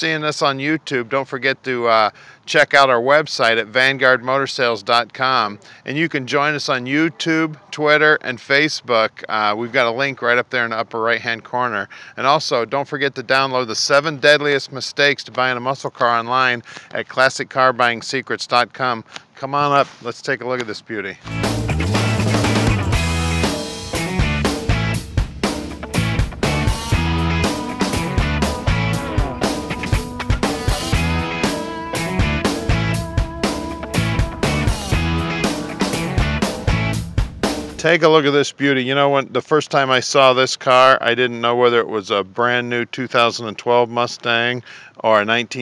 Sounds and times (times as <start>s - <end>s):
Speech: 0.0s - 21.2s, 37.8s - 45.6s.